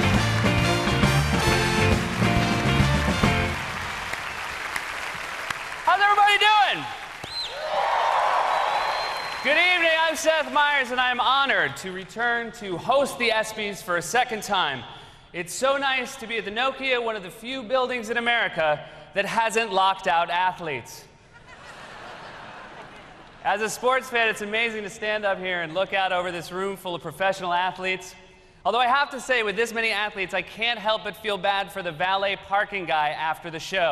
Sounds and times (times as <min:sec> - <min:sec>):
Narration, monologue: 0:05.8 - 0:07.2, 0:09.4 - 0:21.4, 0:23.2 - 0:33.9.